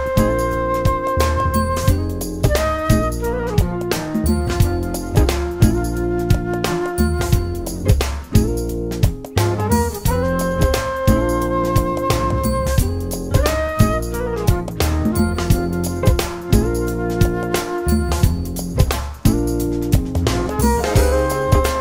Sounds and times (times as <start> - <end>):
Music: 0.0 - 21.8.